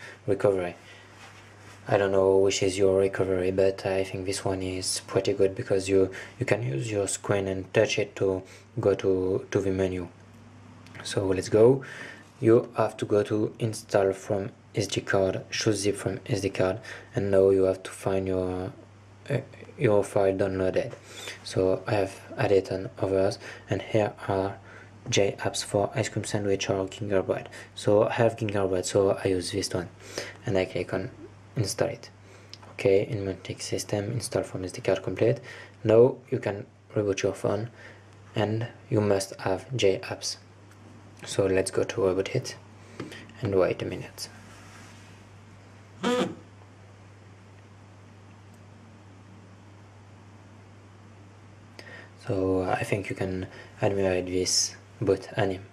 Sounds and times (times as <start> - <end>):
Speech: 0.0 - 0.8, 1.8 - 10.2, 11.0 - 40.5, 41.2 - 42.6, 43.4 - 44.4, 46.0 - 46.4, 52.2 - 55.7.